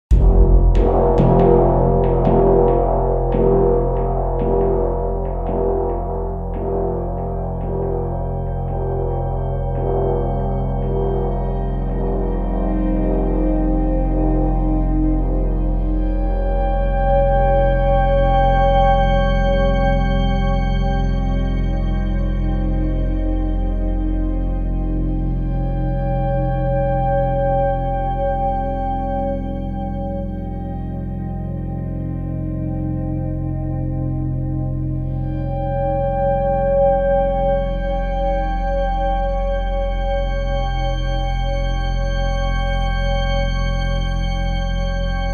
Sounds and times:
Gong: 0.1s - 45.3s.

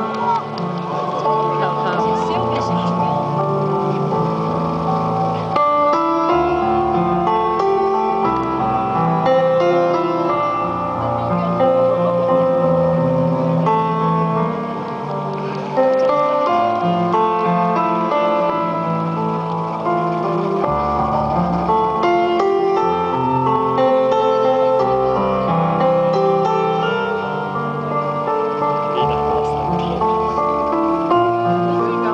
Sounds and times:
Music: 0.0s - 32.1s.

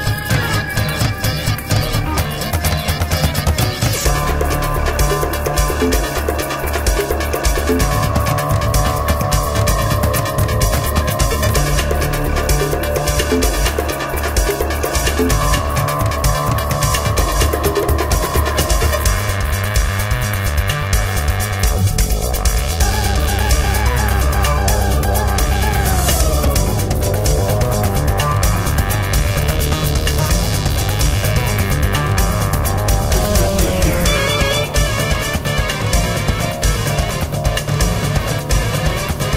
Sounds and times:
Rhythm and blues: 0.0s - 39.3s.

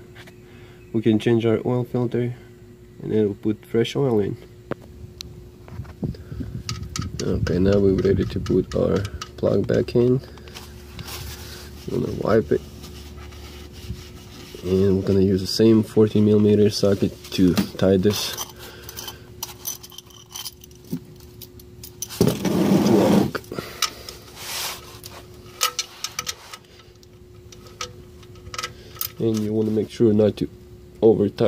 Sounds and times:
Speech: 0.9s - 4.5s, 7.2s - 10.3s, 11.9s - 12.6s, 14.6s - 18.4s, 29.2s - 31.4s
Rattle: 6.4s - 12.2s, 17.8s - 29.6s.

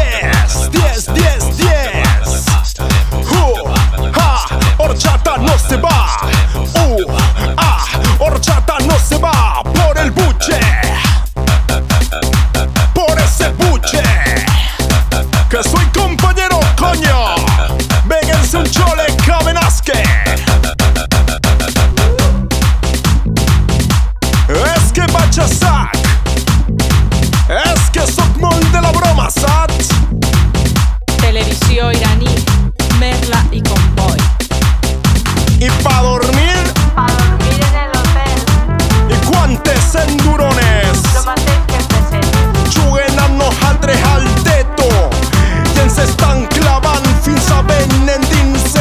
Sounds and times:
Music: 0.0s - 48.8s.

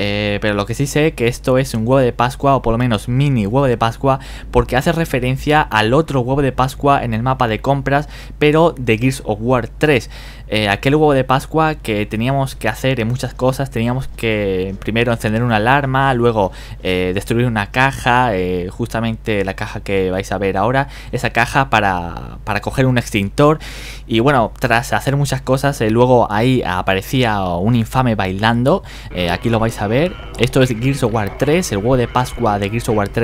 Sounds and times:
Speech: 0.0s - 33.2s.

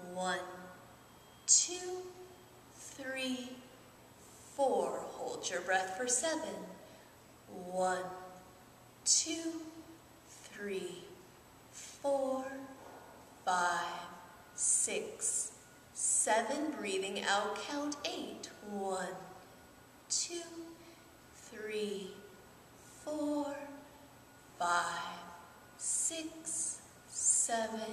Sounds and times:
Speech: 0.0s - 0.7s, 1.5s - 2.2s, 2.8s - 3.6s, 4.6s - 6.9s, 7.5s - 8.3s, 9.1s - 9.8s, 10.4s - 11.2s, 12.0s - 12.8s, 13.5s - 19.4s, 20.1s - 20.8s, 21.4s - 22.3s, 23.1s - 23.8s, 24.6s - 27.9s.

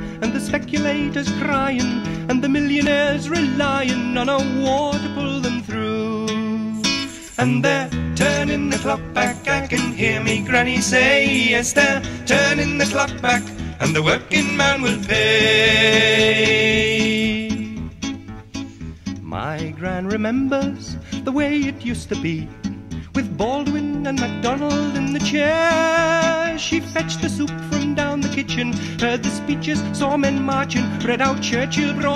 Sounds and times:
Music: 0.0s - 32.1s.

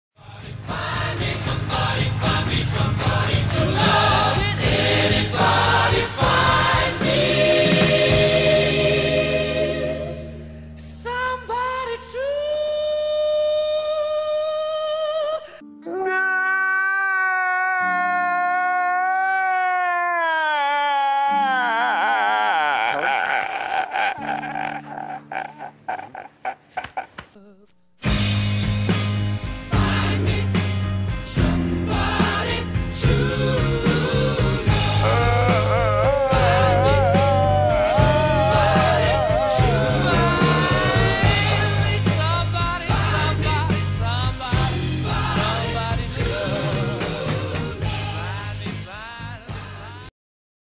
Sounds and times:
Music: 0.2s - 16.4s, 28.0s - 50.1s
Crying, sobbing: 15.8s - 27.7s, 34.9s - 41.2s.

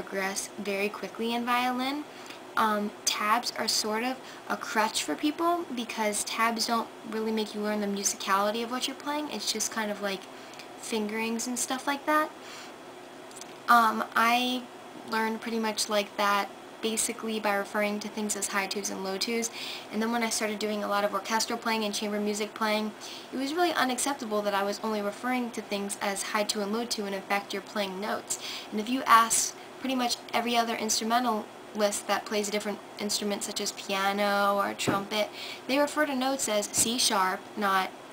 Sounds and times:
Speech: 0.0s - 12.3s, 13.7s - 37.9s.

